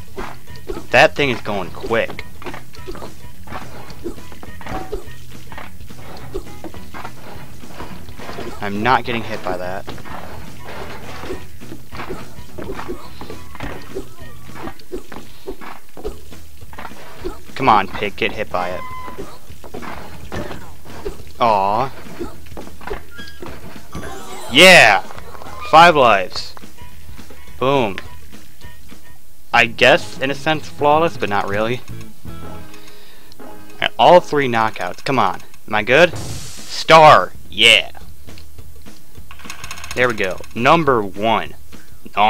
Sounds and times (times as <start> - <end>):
Music: 0.0 - 42.3
Speech: 0.9 - 2.2, 8.6 - 9.8, 17.6 - 18.8, 21.4 - 21.9, 29.6 - 31.8, 33.8 - 36.1, 36.8 - 38.0, 40.0 - 42.3.